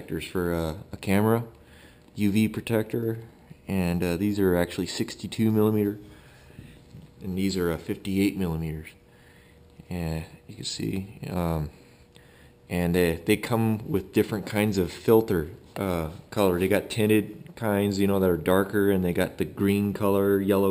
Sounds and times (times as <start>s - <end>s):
Speech: 0.0s - 1.5s, 2.2s - 6.0s, 7.2s - 9.0s, 9.8s - 11.8s, 12.7s - 20.7s.